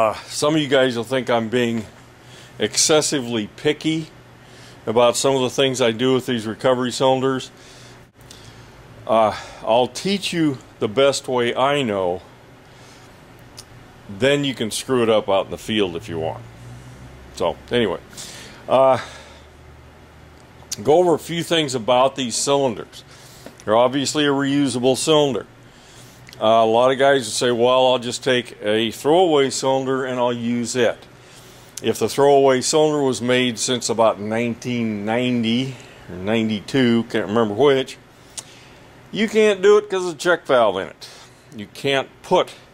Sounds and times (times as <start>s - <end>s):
Speech: 0.0s - 2.0s, 2.6s - 4.2s, 4.9s - 7.6s, 9.1s - 12.3s, 14.1s - 16.4s, 17.4s - 18.1s, 18.7s - 19.1s, 20.7s - 25.5s, 26.4s - 31.1s, 31.8s - 38.0s, 39.1s - 42.7s.